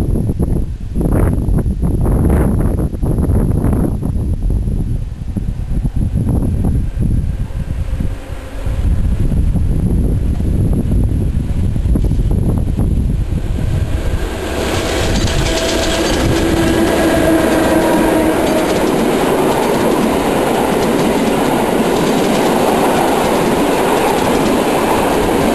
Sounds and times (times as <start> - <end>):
Railroad car, train wagon: 0.0 - 25.5
Train: 0.0 - 25.5.